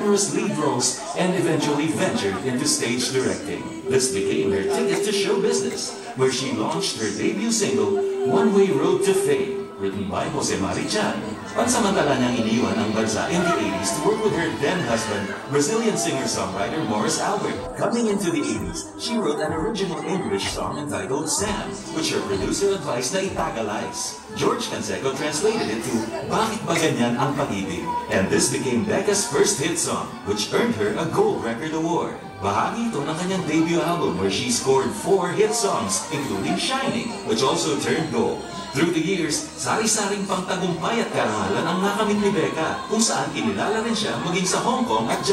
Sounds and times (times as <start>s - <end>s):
Music: 0.0s - 45.3s
Speech: 0.0s - 45.3s.